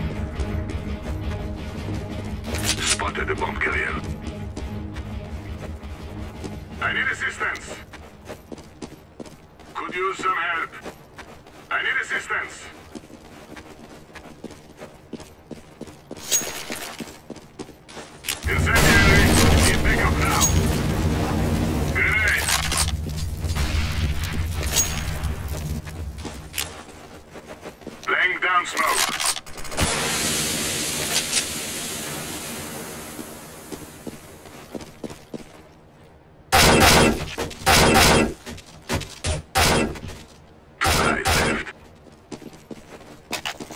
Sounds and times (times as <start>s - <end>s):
Speech: 2.8s - 4.0s, 6.8s - 7.8s, 9.8s - 10.8s, 11.7s - 12.8s, 18.4s - 20.5s, 22.0s - 22.5s, 28.0s - 29.1s.